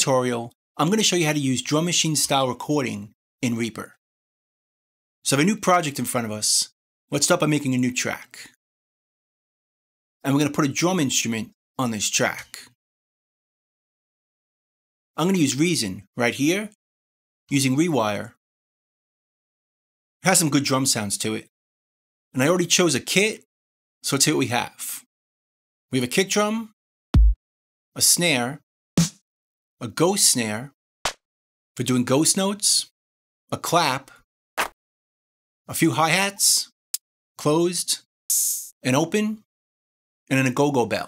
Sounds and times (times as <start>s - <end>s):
Speech: 0.0s - 4.0s, 5.2s - 8.6s, 10.2s - 12.8s, 15.2s - 16.8s, 17.5s - 18.4s, 20.2s - 21.5s, 22.4s - 25.1s, 25.9s - 26.8s, 28.0s - 28.6s, 29.8s - 30.8s, 31.8s - 34.2s, 35.7s - 36.8s, 37.4s - 39.5s, 40.3s - 41.0s.